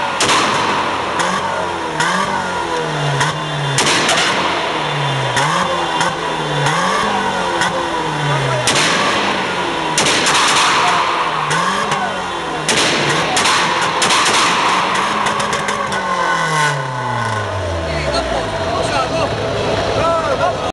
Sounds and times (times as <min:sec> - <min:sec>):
Car: 0:00.0 - 0:20.7
Speech: 0:17.8 - 0:20.7.